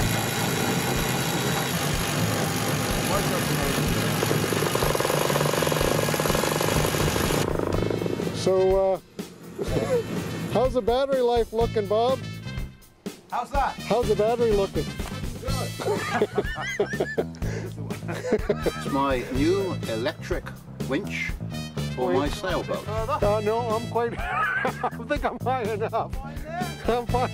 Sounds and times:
Drill: 0.0s - 8.4s
Motorboat, speedboat: 0.0s - 8.4s
Music: 7.5s - 27.3s
Speech: 9.6s - 12.2s, 13.3s - 14.8s, 18.8s - 21.4s.

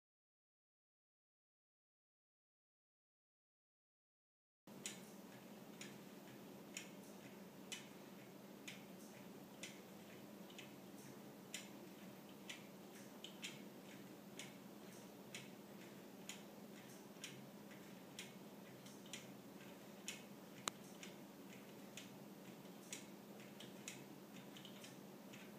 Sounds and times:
Tick-tock: 4.8s - 25.5s.

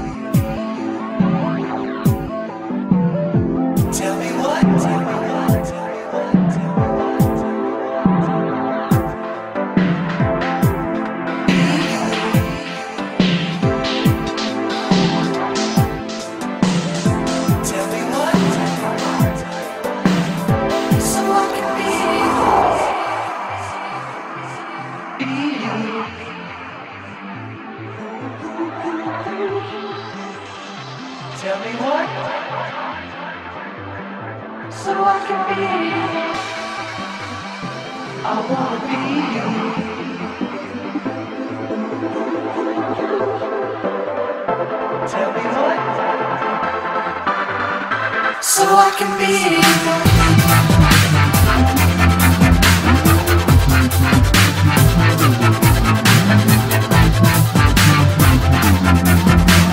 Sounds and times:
Dubstep: 0.0s - 33.9s, 45.1s - 59.7s.

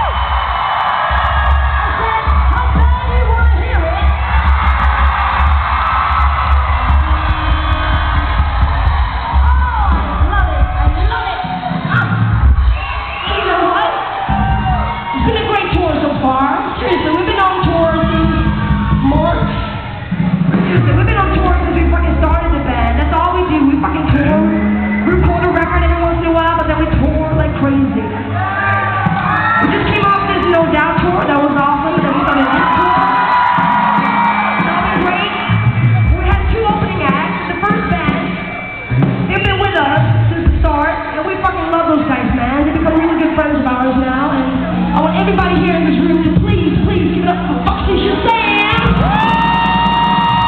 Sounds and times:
Crowd: 0.0s - 50.4s
Music: 0.0s - 50.4s
Speech: 15.2s - 19.5s, 20.6s - 28.2s, 29.6s - 33.1s, 36.1s - 38.3s, 39.3s - 49.0s.

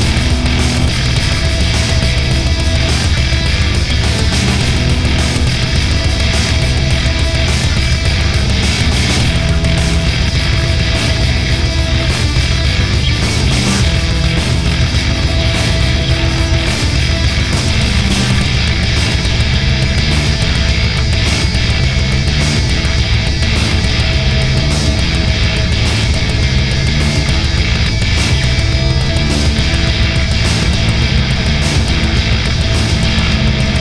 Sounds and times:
Music: 0.0s - 33.8s.

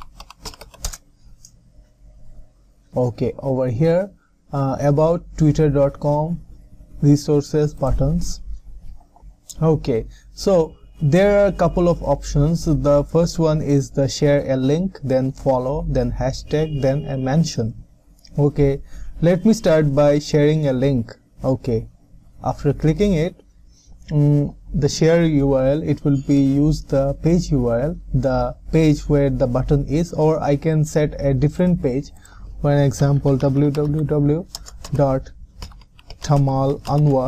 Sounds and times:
Speech: 2.9s - 8.5s, 9.5s - 23.4s, 24.1s - 35.4s, 36.2s - 37.2s.

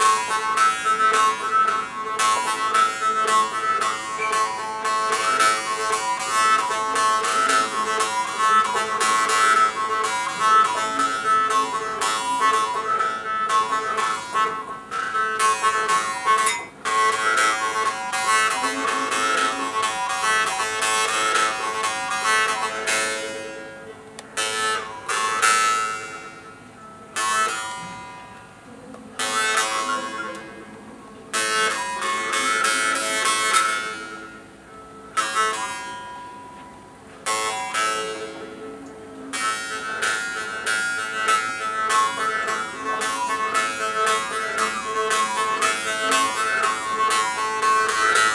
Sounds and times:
Inside, small room: 0.0s - 48.3s
Plucked string instrument: 0.0s - 48.3s.

